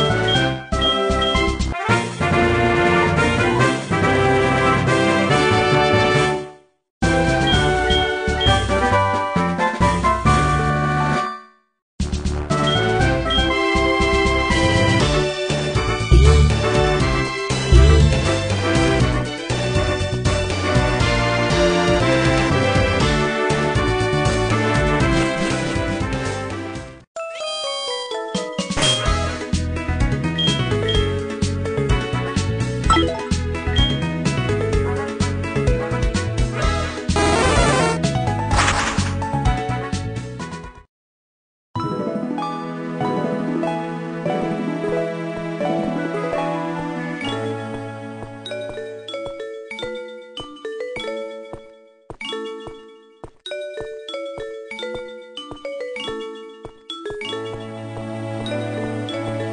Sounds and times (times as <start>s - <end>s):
Music: 0.0s - 40.9s, 41.8s - 59.5s.